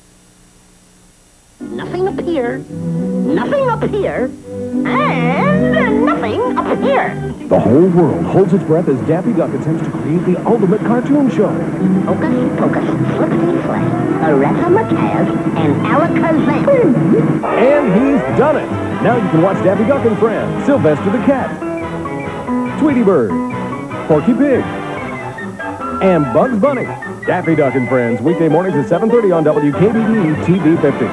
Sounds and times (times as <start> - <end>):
Music: 1.6 - 31.1
Speech: 26.0 - 31.1.